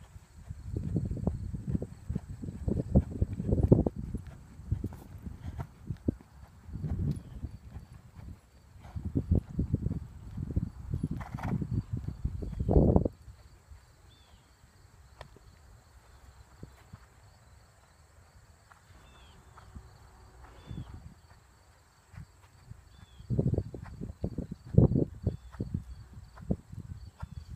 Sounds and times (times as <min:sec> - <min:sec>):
Clip-clop: 0:00.0 - 0:27.5.